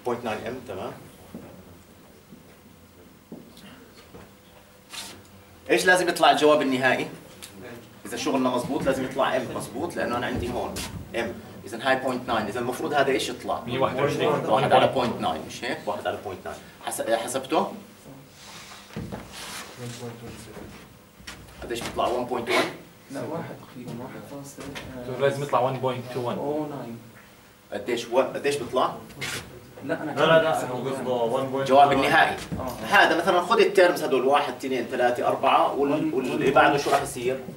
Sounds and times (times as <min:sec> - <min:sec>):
Speech: 0:00.0 - 0:01.0, 0:05.7 - 0:18.2, 0:21.6 - 0:27.1, 0:27.7 - 0:37.5.